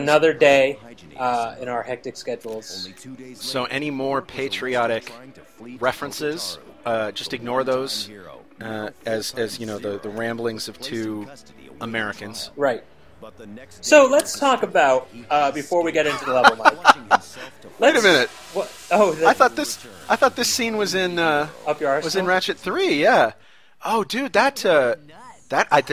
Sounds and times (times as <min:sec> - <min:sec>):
Speech: 0:00.0 - 0:25.9.